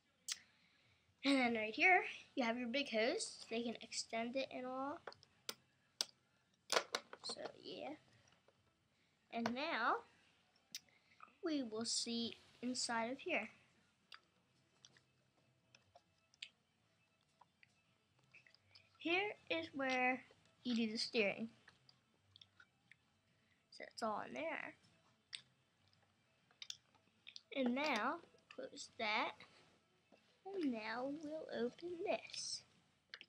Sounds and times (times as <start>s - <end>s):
Speech: 1.2s - 5.1s, 7.2s - 8.0s, 9.3s - 10.1s, 11.4s - 13.6s, 19.0s - 21.6s, 23.8s - 24.8s, 27.5s - 29.4s, 30.4s - 32.7s.